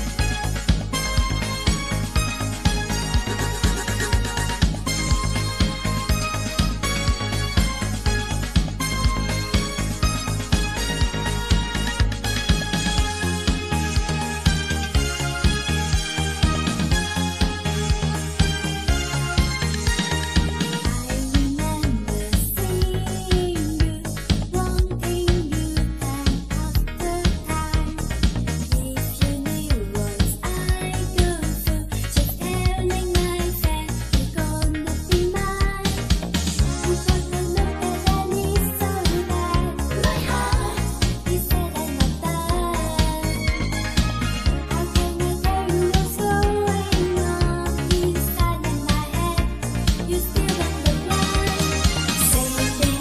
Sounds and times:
Music: 0.0s - 53.0s.

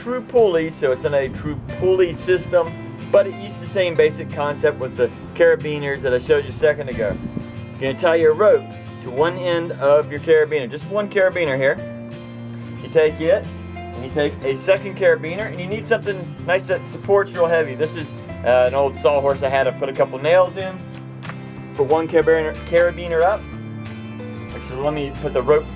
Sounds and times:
Speech: 0.0s - 7.2s, 7.8s - 11.8s, 12.8s - 20.8s, 21.8s - 23.4s, 24.5s - 25.7s
Music: 0.0s - 25.7s.

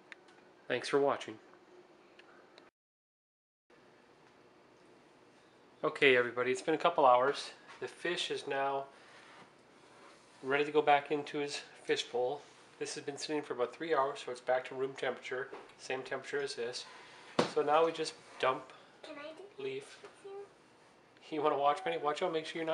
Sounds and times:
Speech: 0.7s - 1.4s, 5.8s - 8.9s, 10.4s - 16.9s, 17.5s - 18.7s, 21.2s - 22.7s.

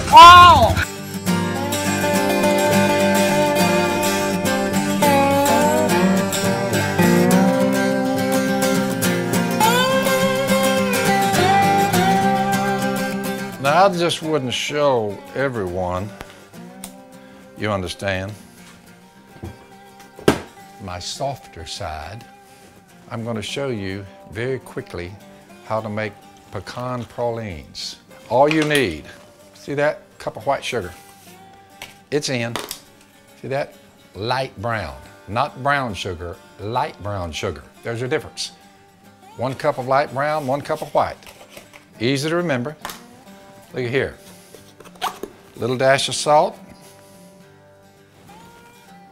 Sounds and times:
Music: 0.0s - 49.1s
Speech: 13.6s - 16.1s, 17.6s - 18.4s, 20.8s - 22.2s, 23.1s - 31.0s, 32.1s - 32.6s, 33.4s - 38.6s, 39.4s - 41.2s, 42.0s - 42.8s, 43.7s - 44.2s, 45.6s - 46.6s.

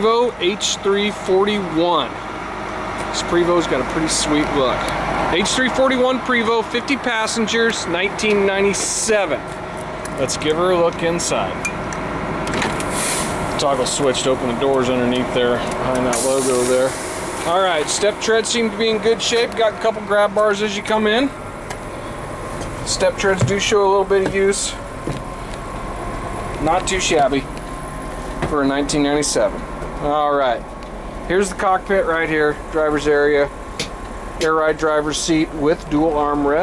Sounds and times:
Speech: 0.0s - 2.2s, 3.1s - 9.5s, 10.2s - 11.6s, 13.6s - 21.4s, 22.8s - 24.8s, 26.6s - 27.5s, 28.4s - 30.7s, 31.3s - 33.6s, 34.4s - 36.6s
Bus: 0.0s - 36.6s.

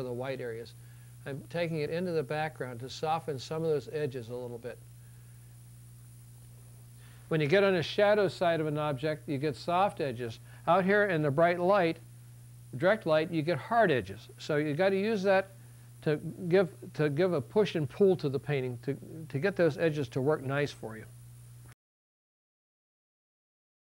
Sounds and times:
Speech: 0.0s - 4.8s, 7.3s - 12.0s, 12.7s - 21.1s.

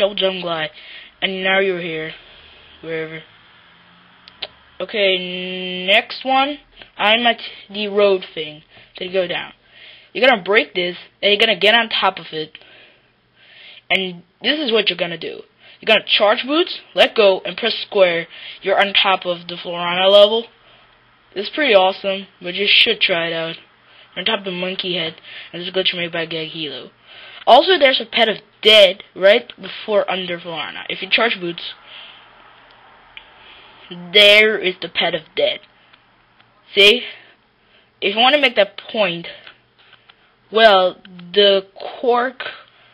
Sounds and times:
Speech: 0.0s - 2.2s, 2.8s - 3.3s, 4.8s - 9.6s, 10.2s - 12.6s, 13.9s - 20.6s, 21.3s - 31.8s, 33.9s - 35.7s, 36.7s - 37.2s, 38.0s - 39.5s, 40.5s - 42.7s.

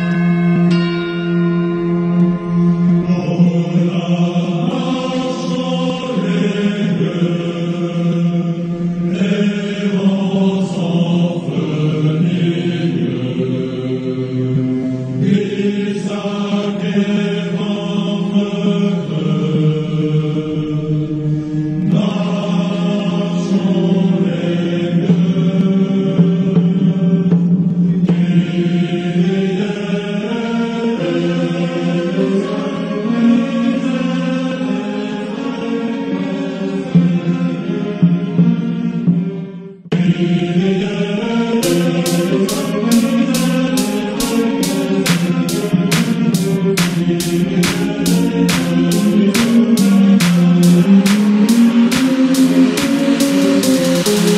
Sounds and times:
Music: 0.0s - 54.3s.

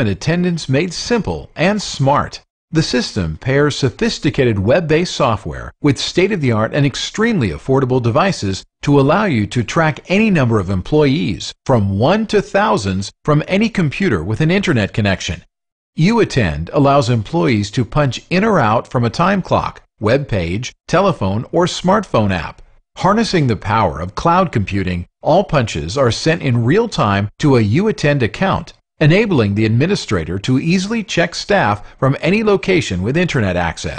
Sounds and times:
Speech: 0.0s - 33.9s.

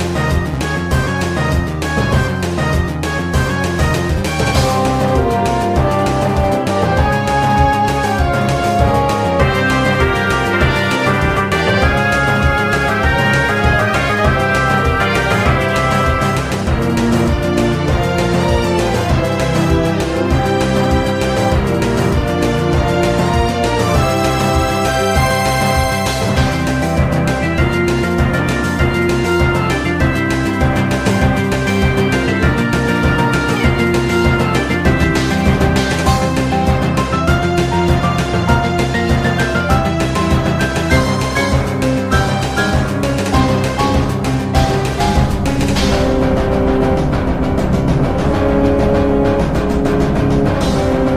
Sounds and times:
Video game music: 0.0s - 51.1s.

